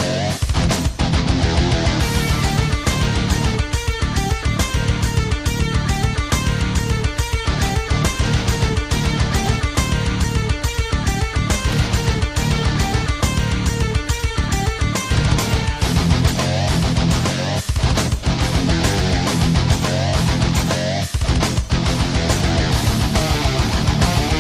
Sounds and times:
Music: 0.0s - 24.4s.

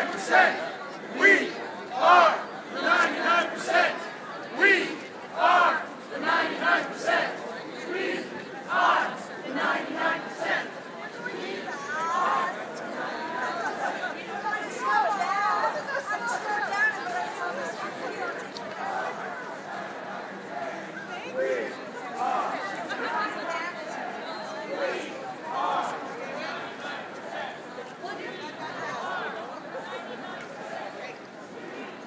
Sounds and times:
Chatter: 0.0s - 32.0s
Outside, urban or manmade: 0.0s - 32.0s
Speech: 0.0s - 32.0s.

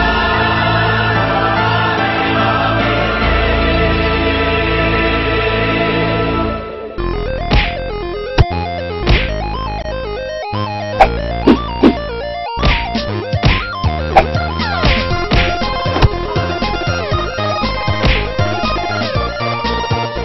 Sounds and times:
Video game music: 0.0s - 20.2s.

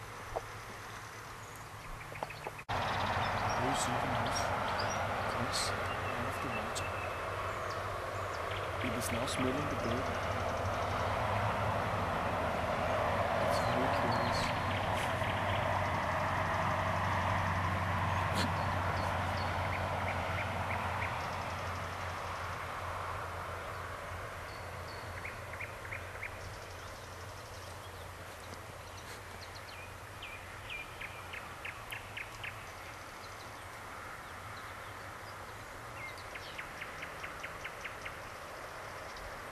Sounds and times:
Speech: 3.6s - 4.5s, 5.3s - 7.0s, 8.8s - 10.2s, 13.5s - 14.6s.

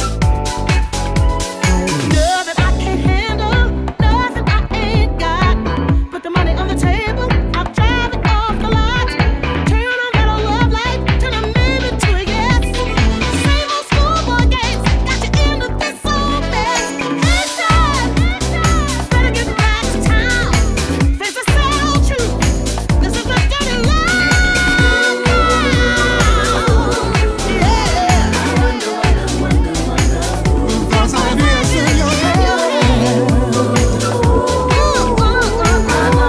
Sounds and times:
Disco: 0.0s - 36.2s.

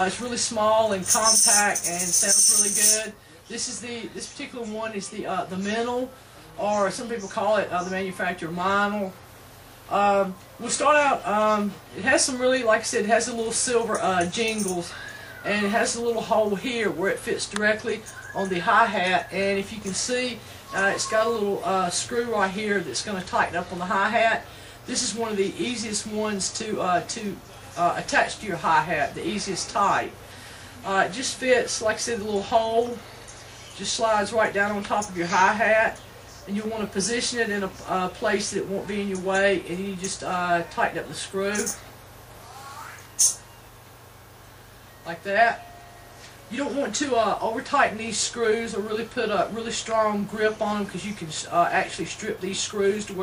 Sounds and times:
Speech: 0.0s - 9.2s, 9.9s - 30.2s, 30.8s - 33.0s, 33.8s - 41.8s, 45.1s - 45.6s, 46.5s - 53.2s.

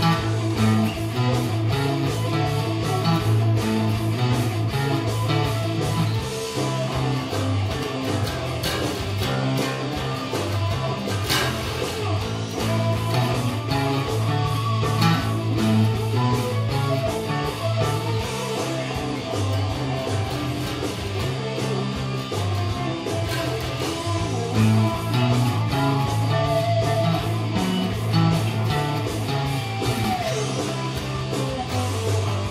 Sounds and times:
Bass guitar: 0.0s - 32.5s.

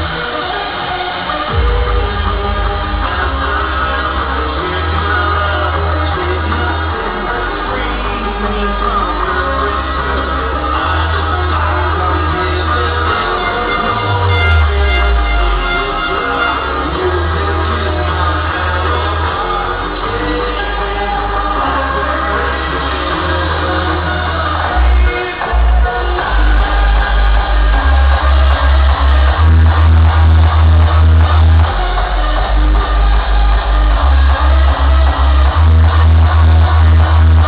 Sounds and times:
Disco: 0.0s - 37.4s.

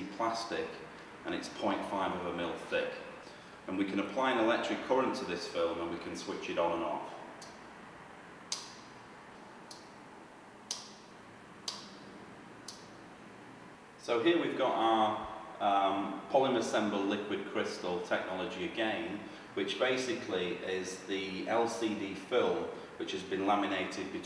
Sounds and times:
Speech: 0.0s - 7.2s, 14.0s - 24.2s.

